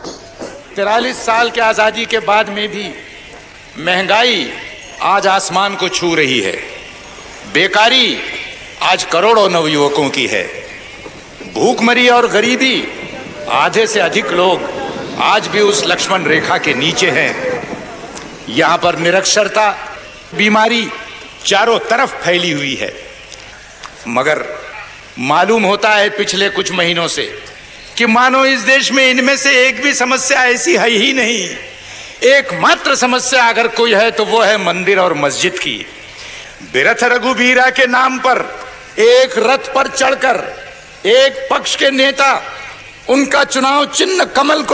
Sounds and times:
Male speech, man speaking: 0.7s - 3.0s, 3.8s - 6.8s, 7.5s - 10.7s, 11.4s - 17.8s, 18.5s - 23.1s, 24.0s - 35.9s, 36.6s - 44.7s.

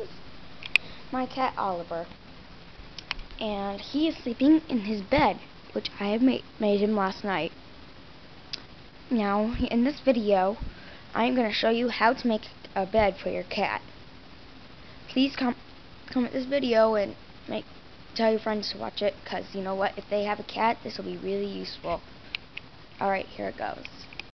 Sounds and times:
Speech: 1.1s - 2.1s, 3.4s - 7.5s, 9.1s - 10.6s, 11.2s - 13.8s, 15.1s - 22.0s, 23.0s - 24.1s.

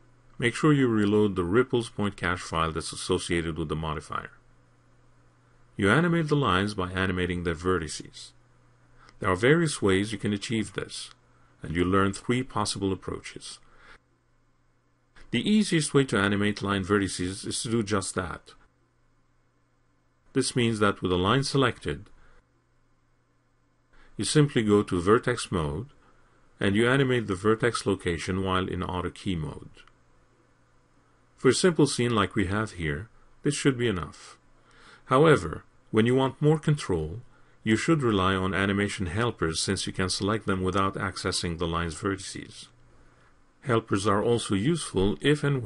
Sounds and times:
Speech: 0.4s - 4.4s, 5.8s - 8.4s, 9.1s - 13.7s, 15.2s - 18.7s, 20.3s - 22.2s, 24.2s - 26.0s, 26.6s - 29.9s, 31.4s - 34.4s, 35.0s - 42.8s, 43.6s - 45.6s.

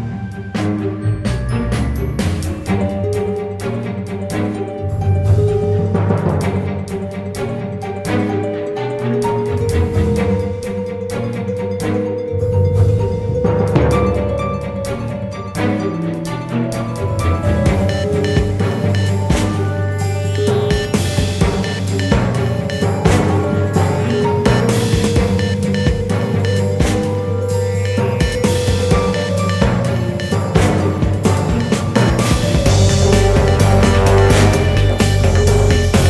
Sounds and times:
Music: 0.0s - 36.0s.

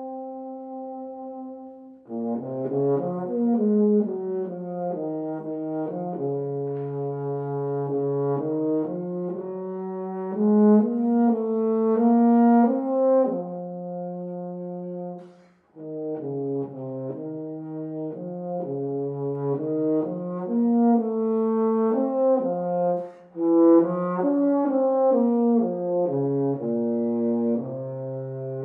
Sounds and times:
Brass instrument: 0.0s - 28.6s.

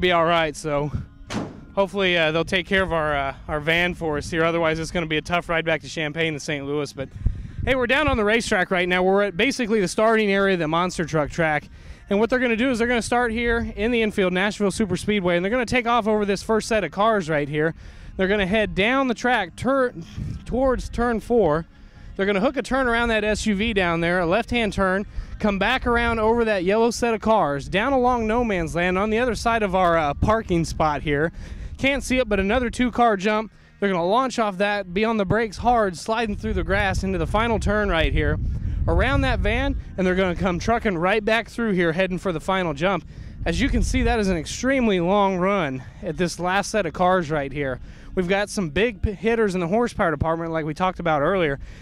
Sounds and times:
Speech: 0.0s - 1.0s, 1.8s - 7.1s, 7.7s - 51.6s.

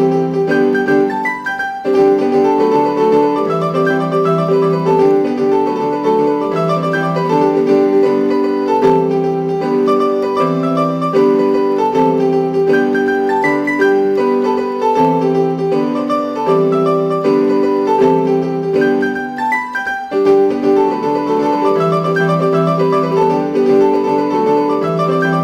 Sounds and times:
Music: 0.0s - 25.4s.

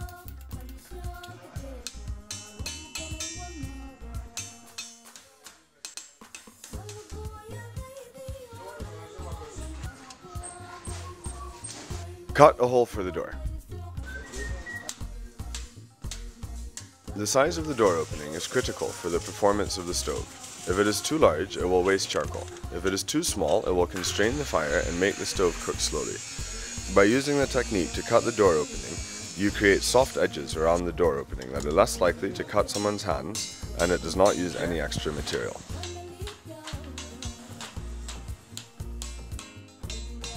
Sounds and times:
Music: 0.0s - 40.3s
Speech: 8.5s - 10.2s, 12.3s - 13.4s, 17.1s - 26.2s, 26.9s - 35.7s
Electric shaver, electric razor: 17.7s - 21.1s, 24.2s - 30.8s.

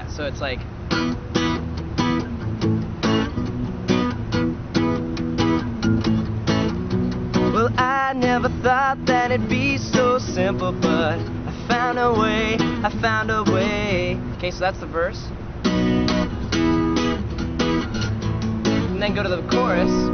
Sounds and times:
Guitar: 0.0s - 20.1s.

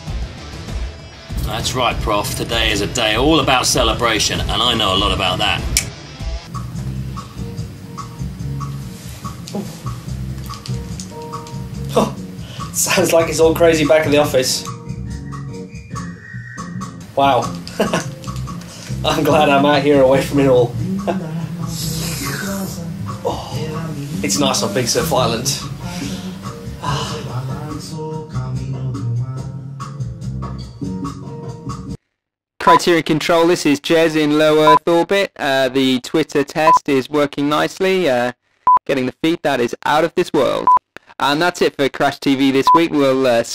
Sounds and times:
Speech: 1.4s - 5.7s, 12.8s - 14.7s, 17.2s - 17.5s, 19.0s - 20.7s, 23.6s - 26.0s, 32.6s - 43.5s.

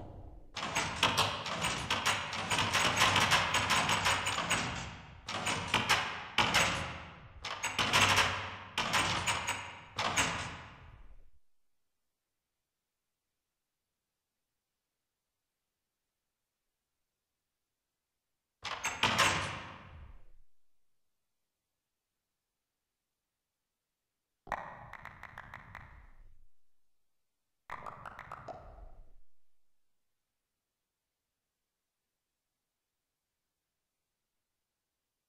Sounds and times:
Door: 0.6s - 11.0s, 18.7s - 20.2s.

